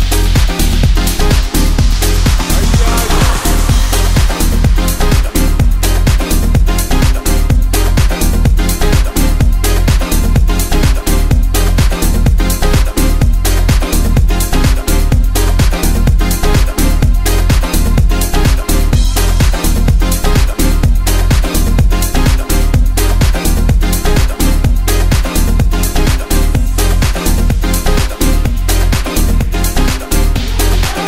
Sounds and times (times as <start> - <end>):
Dance music: 0.0 - 31.0.